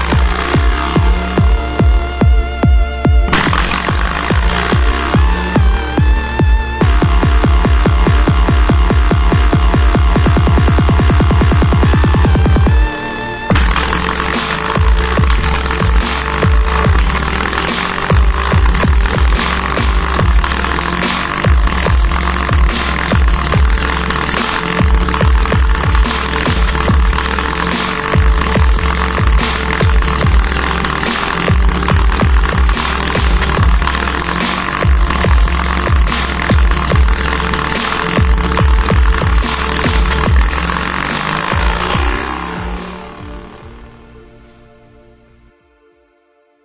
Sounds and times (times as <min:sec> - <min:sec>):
Dubstep: 0:00.0 - 0:44.8.